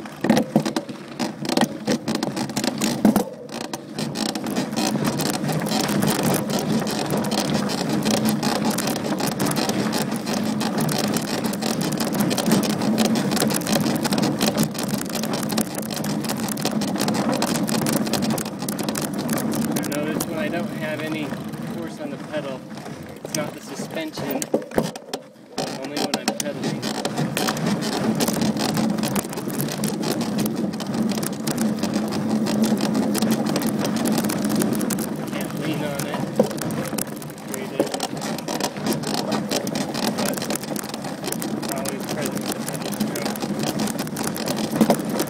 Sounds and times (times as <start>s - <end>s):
Gears: 0.0s - 22.6s, 23.2s - 45.2s
Ratchet, pawl: 0.0s - 45.2s.